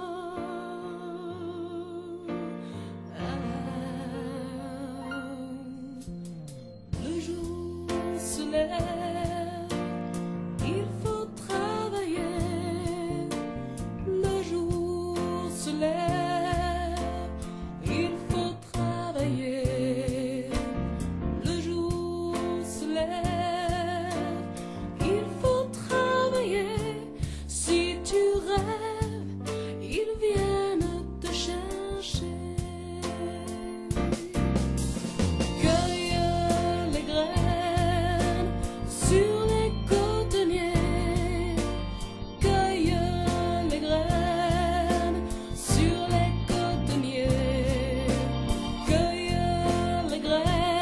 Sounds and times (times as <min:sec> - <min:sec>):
Music: 0:00.0 - 0:50.8.